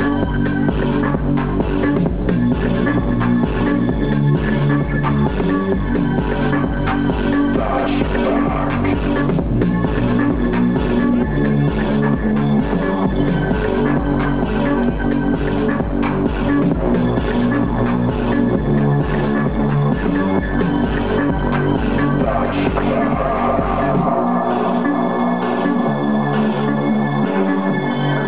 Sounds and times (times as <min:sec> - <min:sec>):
Electronic music: 0:00.0 - 0:28.2.